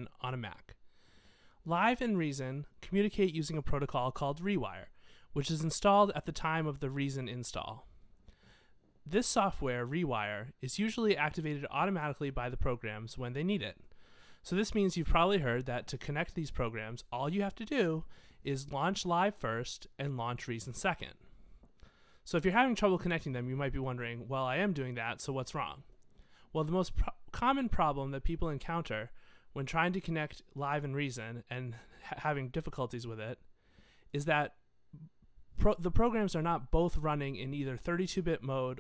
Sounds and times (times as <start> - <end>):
Speech: 0.0 - 0.8, 1.6 - 7.9, 9.1 - 13.8, 14.4 - 21.2, 22.3 - 25.9, 26.5 - 33.5, 34.1 - 38.8.